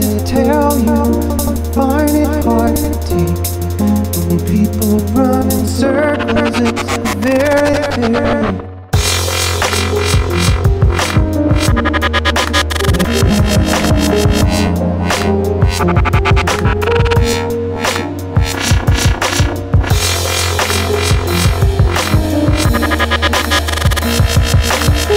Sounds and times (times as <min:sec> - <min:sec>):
Dubstep: 0:00.4 - 0:25.1.